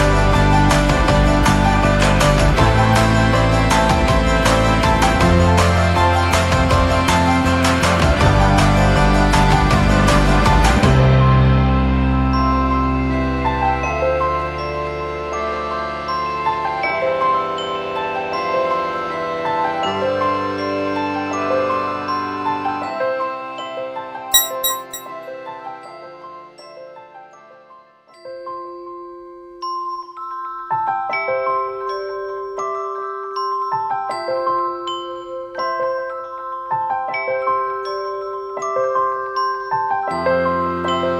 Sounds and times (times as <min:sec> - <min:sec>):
Music: 0:00.0 - 0:41.2.